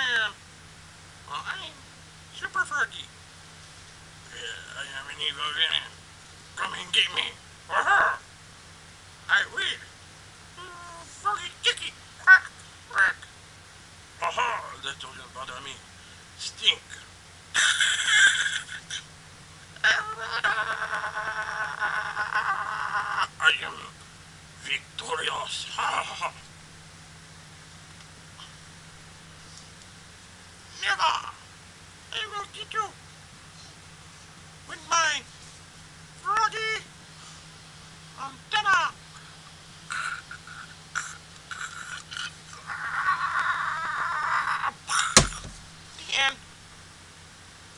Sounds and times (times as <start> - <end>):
Speech: 0.0 - 0.4, 1.3 - 3.1, 4.3 - 6.0, 6.6 - 8.2, 9.3 - 9.9, 10.6 - 13.3, 14.2 - 15.8, 16.4 - 17.1, 19.8 - 20.7, 23.2 - 24.0, 24.6 - 26.4, 30.8 - 31.5, 32.1 - 33.0, 34.7 - 35.3, 36.2 - 36.9, 38.2 - 39.0, 46.0 - 46.4.